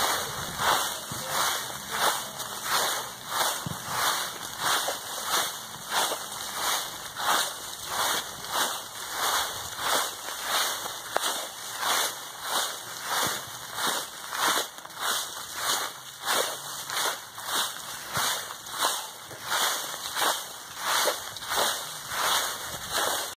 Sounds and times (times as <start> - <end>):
Rustling leaves: 0.0 - 23.3.